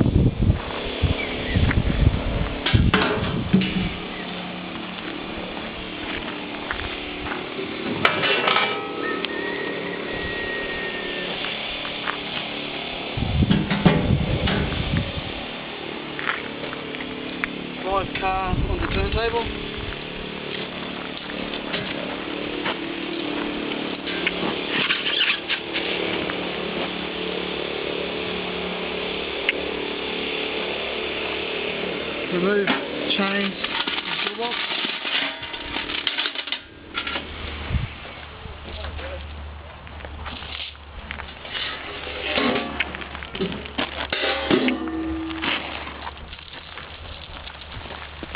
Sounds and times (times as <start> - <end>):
Speech: 17.8 - 19.5, 32.3 - 34.6, 38.7 - 39.3.